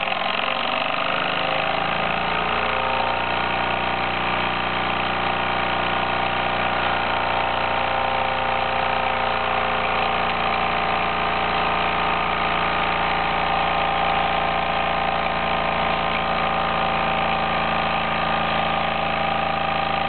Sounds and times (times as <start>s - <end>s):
Engine: 0.0s - 20.0s.